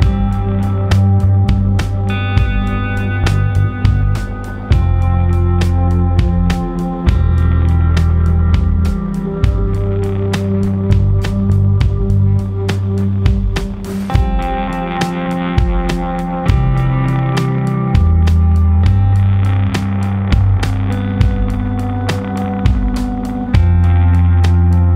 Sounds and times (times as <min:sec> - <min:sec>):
Music: 0:00.0 - 0:24.9.